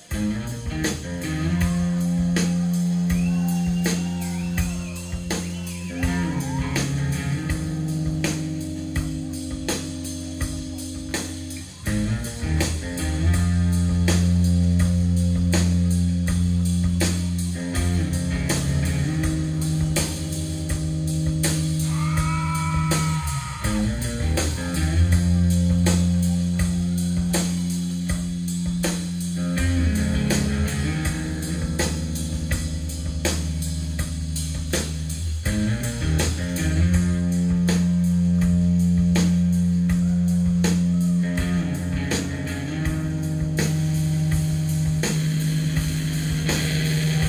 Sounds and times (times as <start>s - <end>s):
Steel guitar, slide guitar: 0.0s - 16.1s, 16.9s - 27.6s, 29.4s - 33.0s, 35.5s - 40.2s, 40.8s - 47.2s.